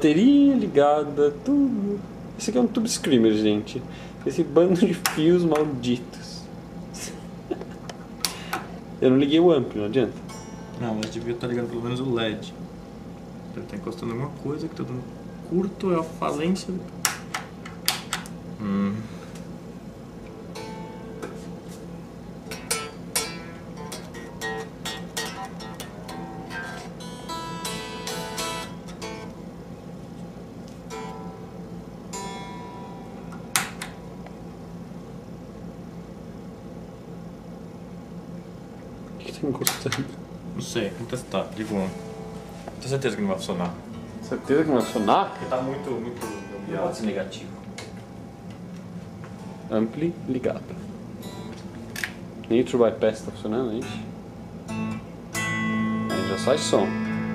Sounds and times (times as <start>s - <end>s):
Speech: 0.0s - 6.5s, 9.0s - 10.2s, 10.8s - 12.6s, 13.5s - 16.9s, 39.2s - 42.0s, 42.8s - 47.6s, 49.7s - 50.8s, 52.5s - 54.1s, 56.2s - 56.9s
Guitar: 6.8s - 19.6s, 20.2s - 34.7s, 38.9s - 57.3s
Effects unit: 10.1s - 11.8s, 20.2s - 34.5s, 41.9s - 43.0s, 43.8s - 47.0s, 51.2s - 52.2s, 53.8s - 57.3s.